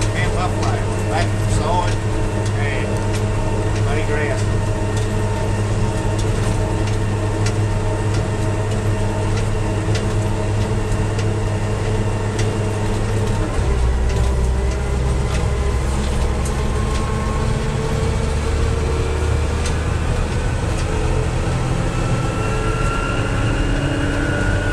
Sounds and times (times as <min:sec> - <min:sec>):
Vehicle: 0:00.0 - 0:24.7.